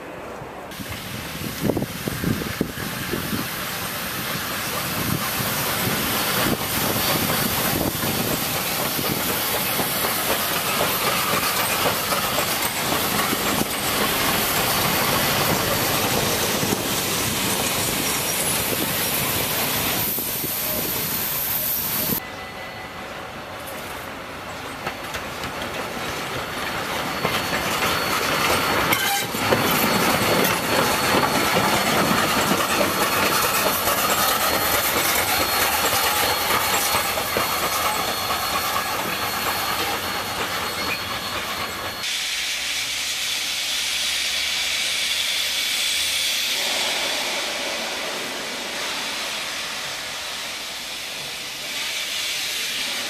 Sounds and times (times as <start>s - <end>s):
Hiss: 0.7s - 22.2s, 24.9s - 53.1s.